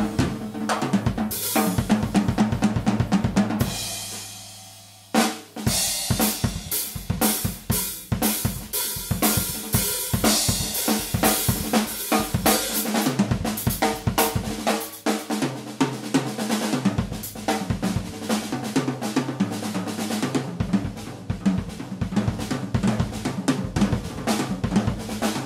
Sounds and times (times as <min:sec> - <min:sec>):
Bass drum: 0:00.0 - 0:04.6, 0:05.6 - 0:14.7
Drum kit: 0:00.0 - 0:25.4
Snare drum: 0:00.0 - 0:25.4.